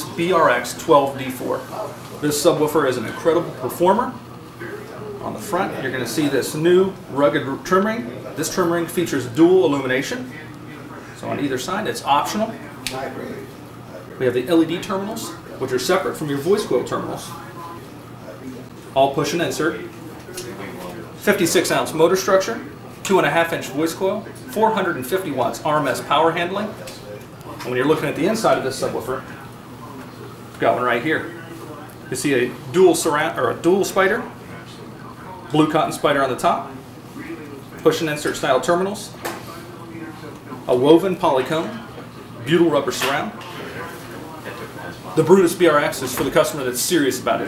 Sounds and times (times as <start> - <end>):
Speech: 0.0 - 47.4.